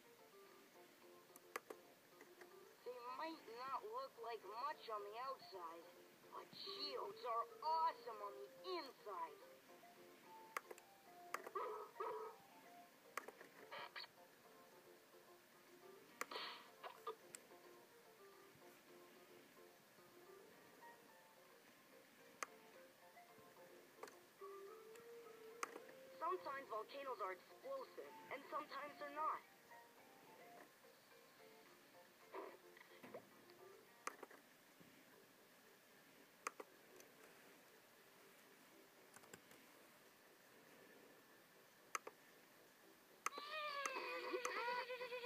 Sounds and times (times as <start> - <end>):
Speech: 2.8 - 9.4, 26.2 - 29.4.